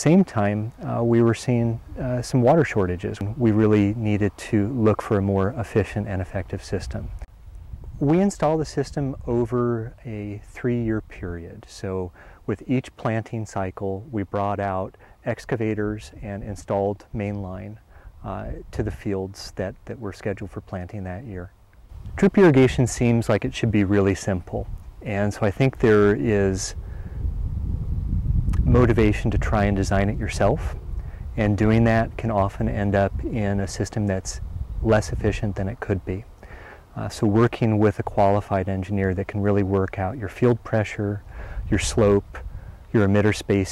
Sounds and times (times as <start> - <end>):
Speech: 0.0 - 7.2, 8.0 - 21.5, 22.2 - 26.8, 28.6 - 30.8, 31.4 - 36.3, 36.9 - 43.7.